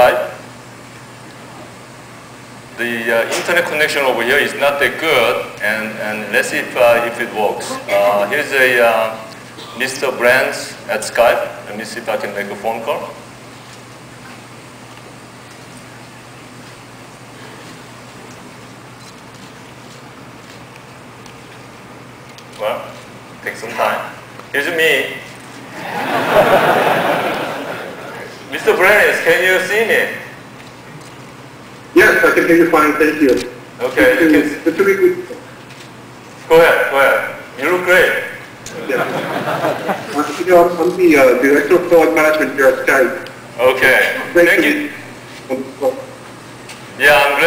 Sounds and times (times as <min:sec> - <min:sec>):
Speech: 0:02.8 - 0:13.2, 0:22.6 - 0:25.3, 0:28.1 - 0:30.3, 0:32.0 - 0:35.4, 0:40.1 - 0:46.2, 0:47.0 - 0:47.4.